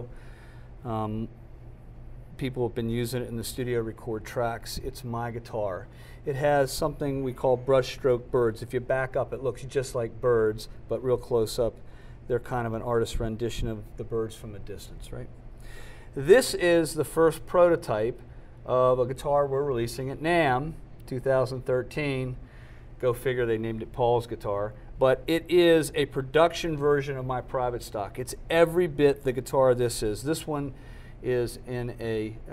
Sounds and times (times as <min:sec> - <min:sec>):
Speech: 0:00.8 - 0:01.4, 0:02.3 - 0:15.4, 0:16.2 - 0:22.4, 0:23.0 - 0:32.5.